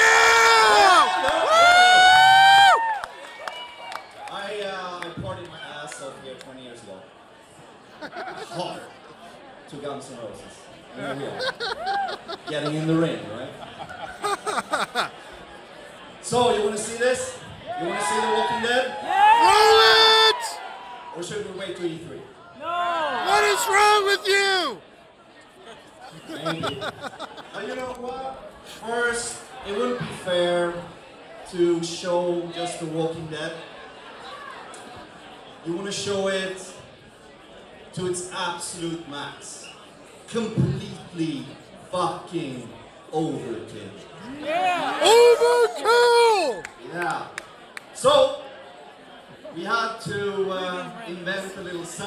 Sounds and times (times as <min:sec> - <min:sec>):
Male speech, man speaking: 0:04.3 - 0:07.0, 0:08.4 - 0:08.9, 0:09.7 - 0:11.4, 0:12.5 - 0:13.6, 0:16.2 - 0:20.6, 0:21.2 - 0:22.3, 0:23.0 - 0:24.8, 0:27.5 - 0:30.9, 0:31.5 - 0:33.6, 0:35.6 - 0:36.9, 0:37.9 - 0:39.7, 0:40.3 - 0:47.4, 0:48.0 - 0:48.4, 0:49.5 - 0:52.0.